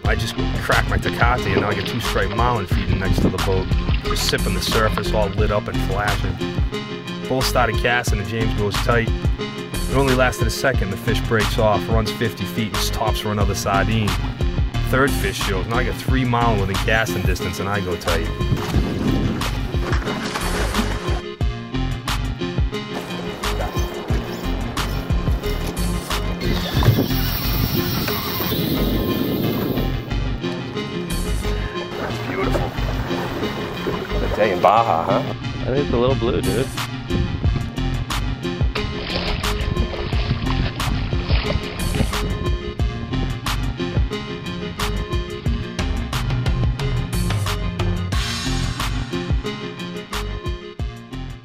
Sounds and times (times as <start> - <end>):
Speech: 0.0 - 6.4, 7.3 - 9.1, 9.9 - 14.2, 14.8 - 18.3, 32.1 - 32.7, 34.2 - 36.8
Music: 0.0 - 51.4.